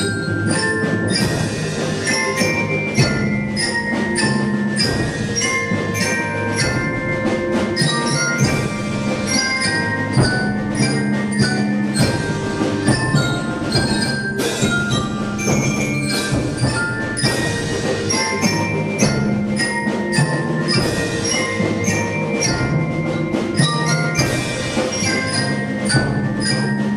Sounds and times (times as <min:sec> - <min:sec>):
Drum kit: 0:00.0 - 0:26.9
Glockenspiel: 0:00.0 - 0:26.9
Marimba, xylophone: 0:00.0 - 0:26.9
Snare drum: 0:00.0 - 0:26.9.